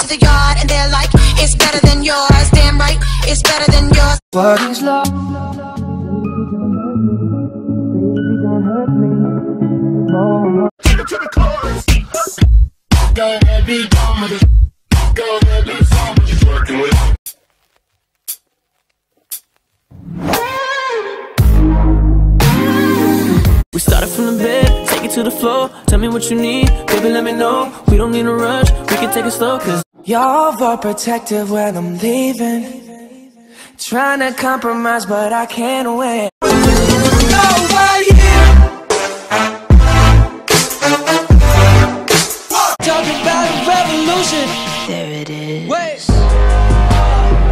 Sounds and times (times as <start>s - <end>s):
Music: 0.0s - 17.2s, 21.4s - 29.8s, 36.4s - 45.5s, 46.1s - 47.5s.